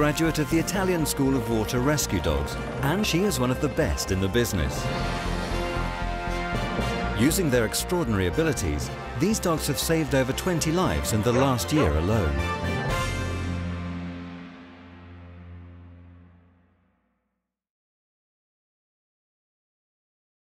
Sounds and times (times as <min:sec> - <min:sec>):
Speech: 0:00.0 - 0:04.9, 0:07.2 - 0:12.4
Music: 0:00.0 - 0:17.5.